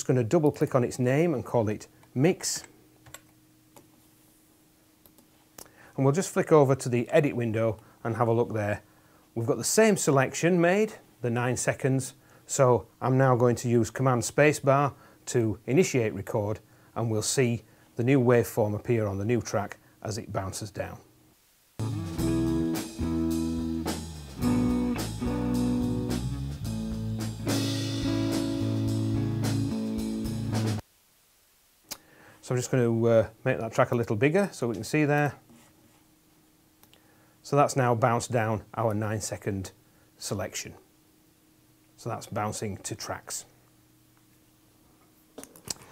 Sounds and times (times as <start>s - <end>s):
Speech: 0.0s - 2.7s, 6.0s - 21.1s, 32.4s - 35.4s, 37.4s - 40.9s, 42.0s - 43.6s
Blues: 21.8s - 30.8s.